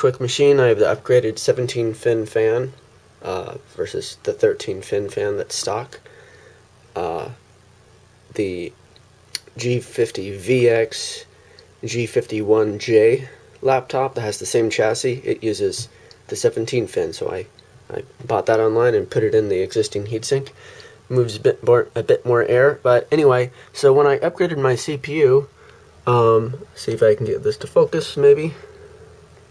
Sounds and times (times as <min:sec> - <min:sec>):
Speech: 0:00.0 - 0:06.0, 0:07.0 - 0:07.4, 0:08.3 - 0:08.8, 0:09.4 - 0:28.7.